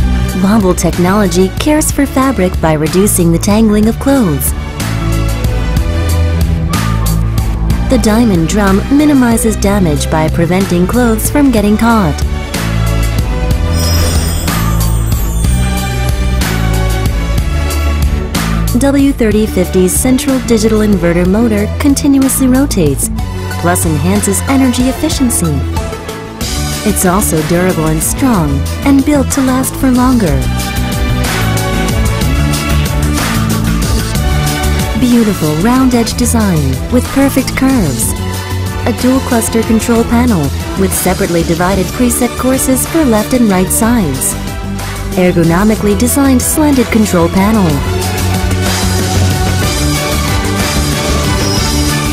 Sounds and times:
Music: 0.0s - 52.1s
Speech: 0.4s - 4.5s, 7.9s - 12.2s, 18.7s - 25.7s, 26.8s - 30.5s, 35.0s - 38.2s, 38.9s - 44.4s, 45.2s - 47.9s.

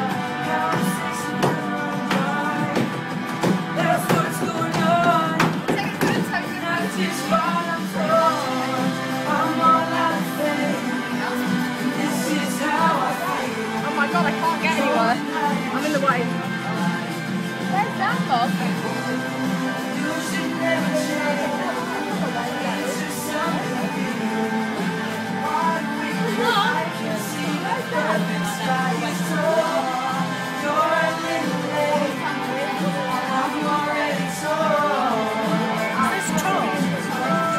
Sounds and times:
Female singing: 0.0s - 3.0s, 3.8s - 15.8s, 19.9s - 37.5s
Music: 0.0s - 37.5s
Speech: 3.8s - 8.5s, 11.2s - 16.4s, 17.7s - 19.2s, 20.0s - 24.3s, 25.6s - 30.0s, 30.8s - 37.5s.

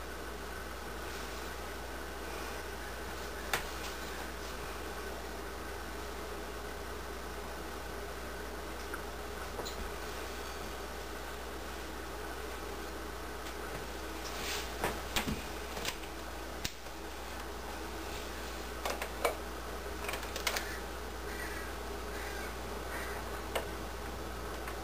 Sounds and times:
Caw: 20.6s - 23.4s.

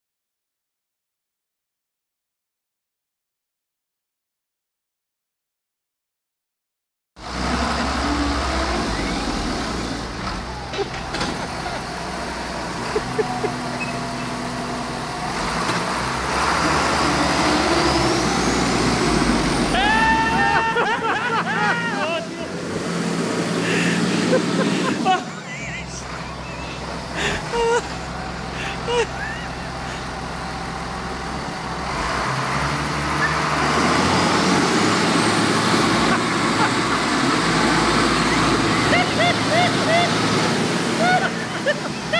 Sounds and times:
Motor vehicle (road): 7.2s - 42.2s.

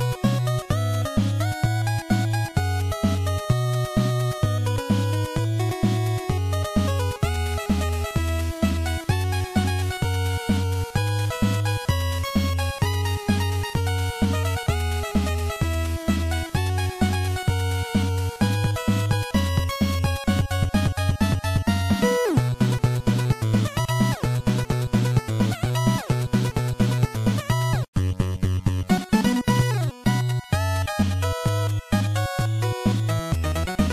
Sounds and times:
Music: 0.0s - 33.9s.

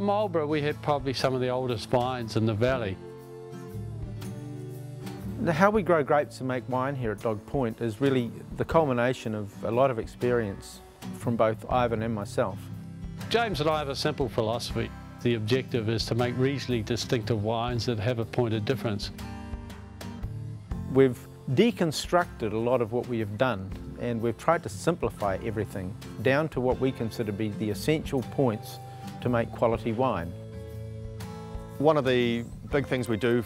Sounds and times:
Speech: 0.0s - 3.0s, 5.3s - 12.7s, 13.3s - 19.2s, 20.9s - 30.4s, 31.8s - 33.4s
Music: 0.0s - 33.4s.

